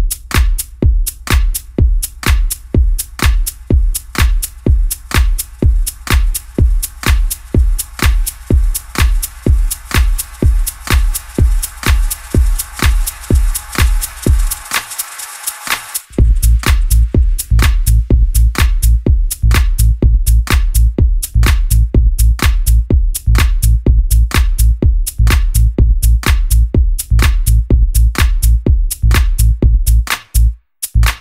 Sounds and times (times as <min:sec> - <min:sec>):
Music: 0:00.0 - 0:31.2.